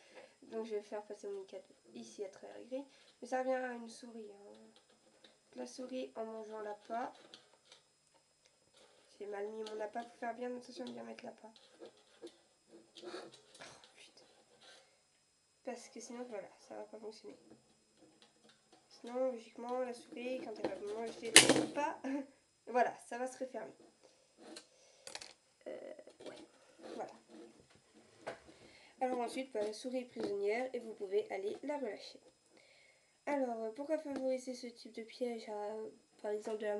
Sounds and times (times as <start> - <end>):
Speech: 0.4 - 4.8, 5.5 - 7.2, 9.1 - 11.6, 15.7 - 17.4, 18.9 - 23.8, 25.6 - 27.3, 29.0 - 32.2, 33.2 - 36.7.